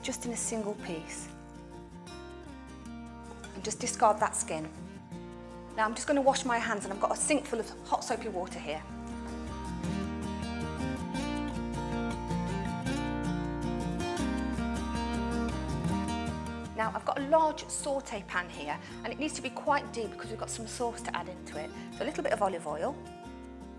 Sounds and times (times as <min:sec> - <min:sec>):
Speech: 0:00.0 - 0:01.3, 0:03.6 - 0:04.8, 0:05.8 - 0:08.8, 0:16.8 - 0:23.0
Music: 0:00.0 - 0:23.7.